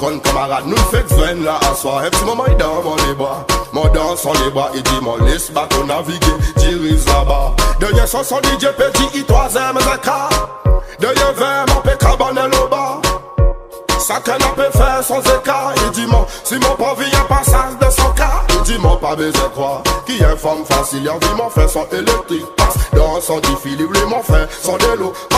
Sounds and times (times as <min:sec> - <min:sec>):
Music: 0:00.0 - 0:25.3.